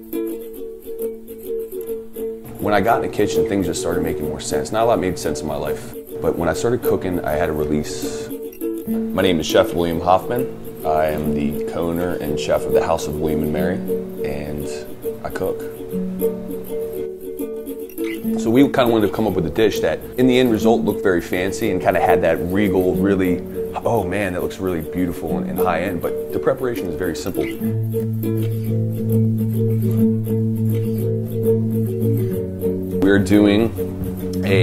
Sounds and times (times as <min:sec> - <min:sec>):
Music: 0:00.0 - 0:34.6
Speech: 0:02.6 - 0:08.4, 0:09.2 - 0:15.7, 0:18.4 - 0:27.6, 0:33.0 - 0:33.8, 0:34.4 - 0:34.6.